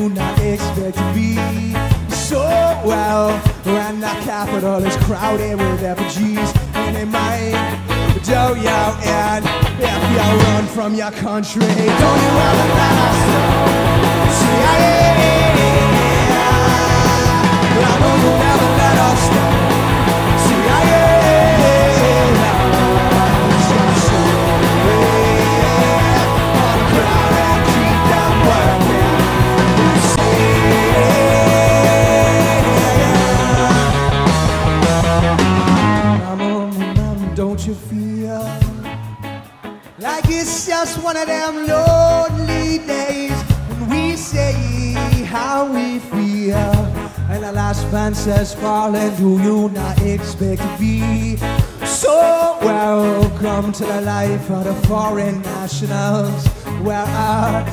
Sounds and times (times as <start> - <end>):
Music: 0.0 - 57.7.